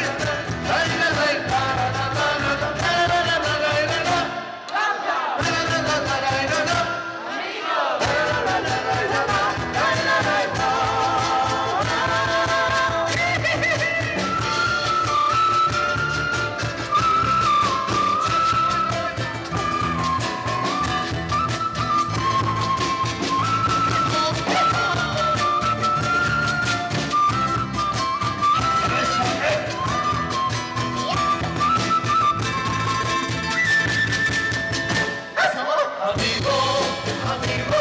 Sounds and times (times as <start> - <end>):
Music: 0.0 - 4.5, 5.4 - 35.4, 36.1 - 37.8
Singing: 0.0 - 14.9, 28.8 - 30.0, 35.4 - 37.8.